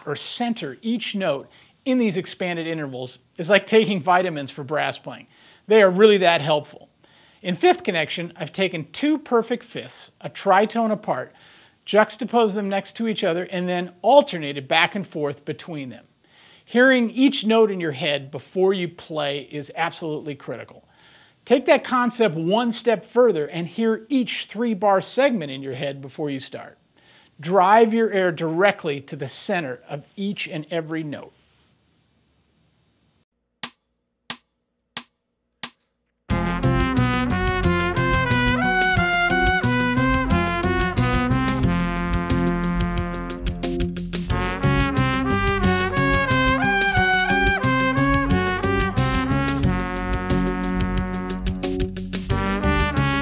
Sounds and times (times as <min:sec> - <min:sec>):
Speech: 0:00.0 - 0:16.1, 0:16.7 - 0:20.8, 0:21.5 - 0:26.8, 0:27.4 - 0:31.3.